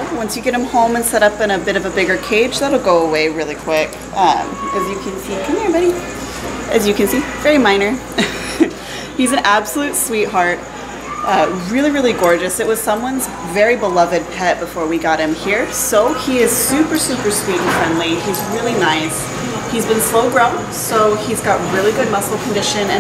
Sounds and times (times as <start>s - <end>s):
Speech: 0.0s - 6.1s, 6.7s - 8.0s, 9.2s - 10.6s, 11.2s - 23.0s.